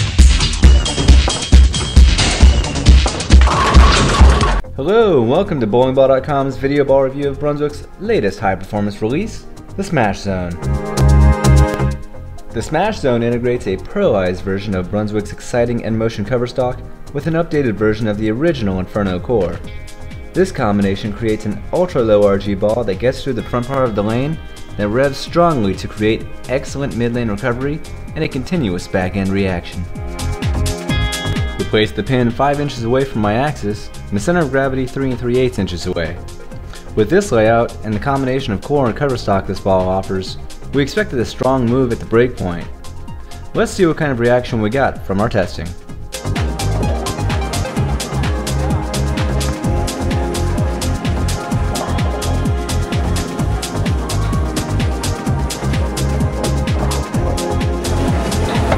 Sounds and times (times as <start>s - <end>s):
Music: 0.0s - 58.7s
Speech: 4.8s - 10.6s, 12.6s - 19.7s, 20.4s - 29.9s, 31.6s - 36.2s, 37.0s - 42.7s, 43.6s - 45.8s.